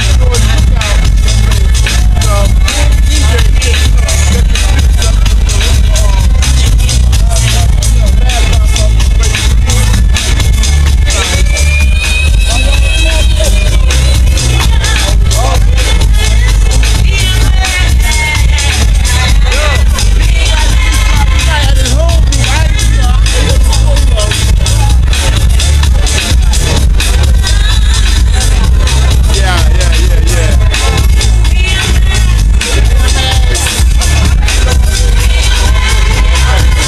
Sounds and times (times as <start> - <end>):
Speech: 0.0 - 10.4, 12.4 - 18.2, 18.8 - 26.8, 28.3 - 36.8
Dance music: 0.0 - 36.8.